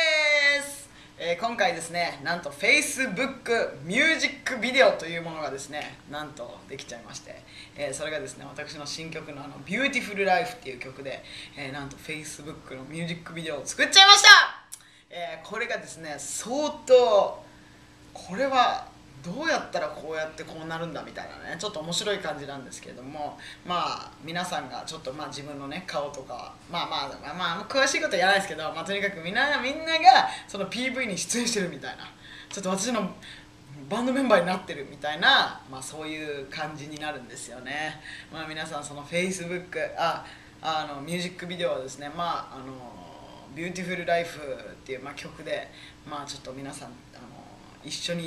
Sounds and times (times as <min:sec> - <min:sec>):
Speech: 0:00.0 - 0:17.4, 0:18.2 - 0:48.2.